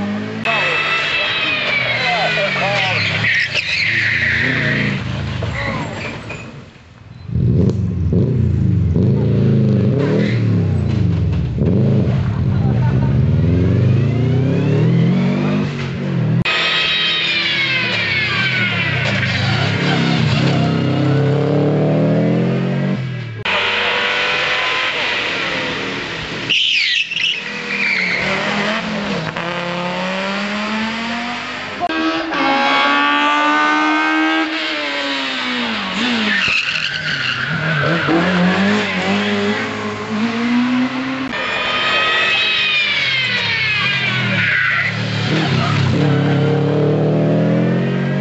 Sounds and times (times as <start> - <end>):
Race car, auto racing: 0.0 - 48.2.